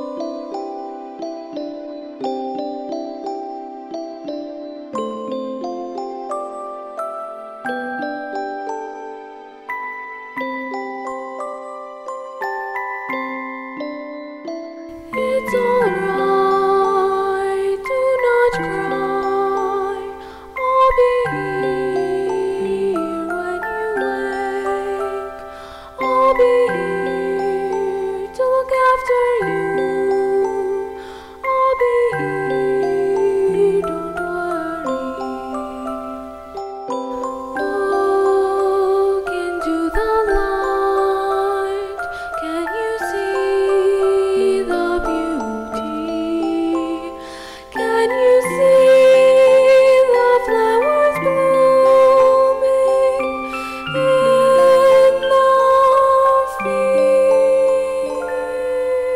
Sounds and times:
Music: 0.0s - 59.1s.

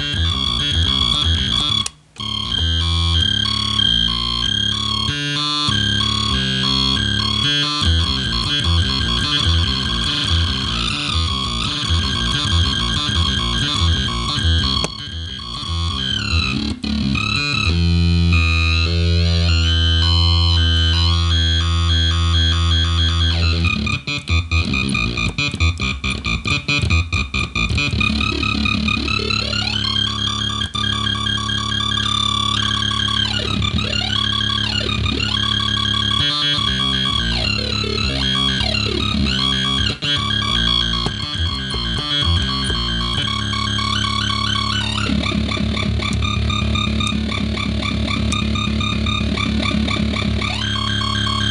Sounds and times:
Sampler: 0.0s - 51.5s.

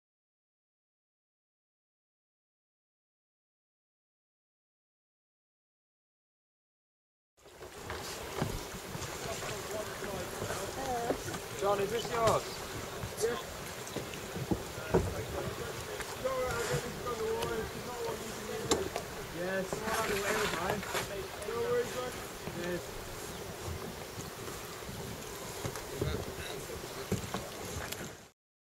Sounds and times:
Boat, Water vehicle: 7.4s - 28.4s
Speech: 14.8s - 22.8s.

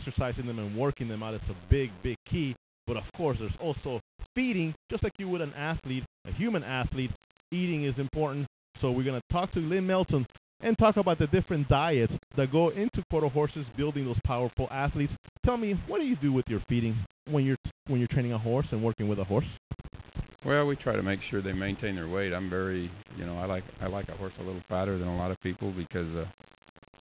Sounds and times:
Speech: 0.0s - 19.6s, 20.4s - 26.3s.

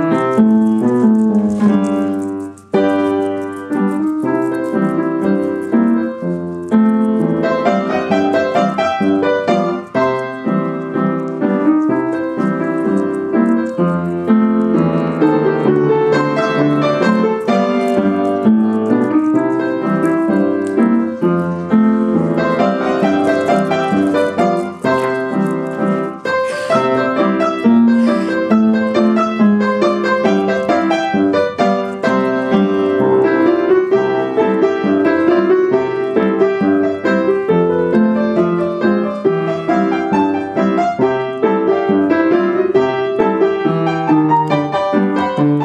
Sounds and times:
Music: 0.0s - 45.6s.

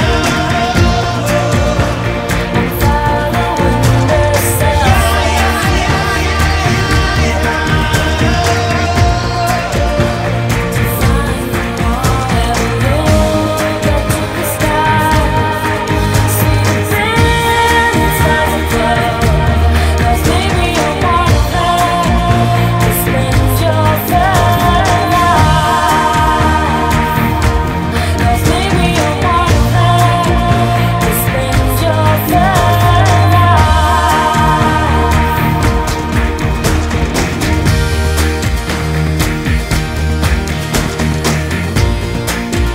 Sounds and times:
Music: 0.0s - 42.7s.

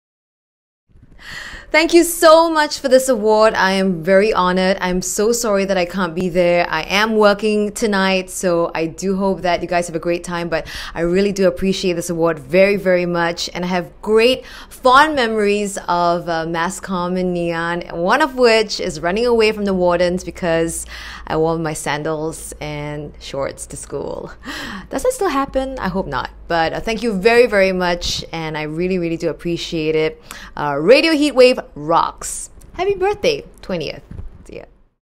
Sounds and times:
Narration, monologue: 0.9s - 35.0s
Female speech, woman speaking: 1.8s - 34.7s.

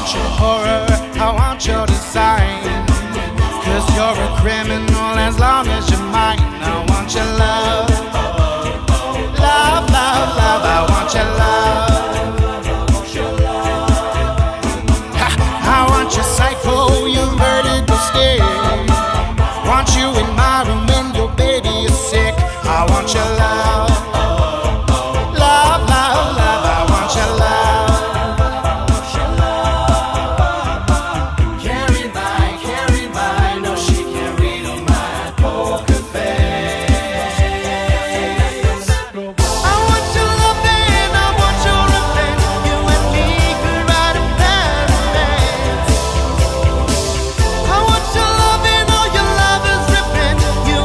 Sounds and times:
Reggae: 0.0s - 50.8s
Singing: 0.0s - 50.8s.

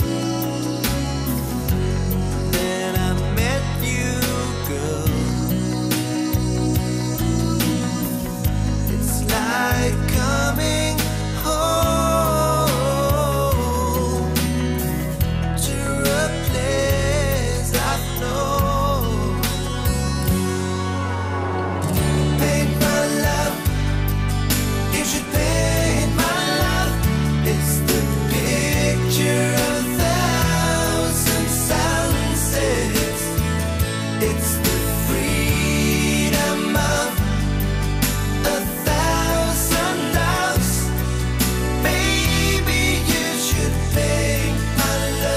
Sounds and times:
Music: 0.0s - 45.3s.

